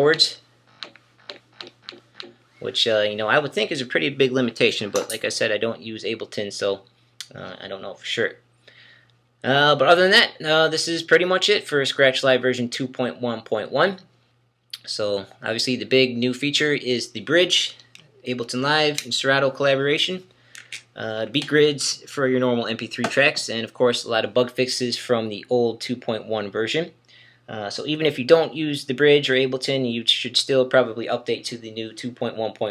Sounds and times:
Speech: 0.0s - 0.4s, 2.6s - 8.4s, 9.4s - 14.1s, 14.8s - 20.3s, 20.9s - 32.7s.

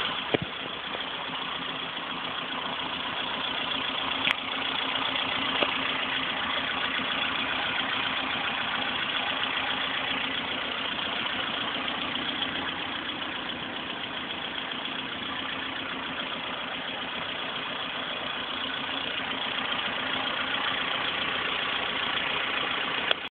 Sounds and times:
Idling: 0.0s - 23.3s
Vehicle: 0.0s - 23.3s.

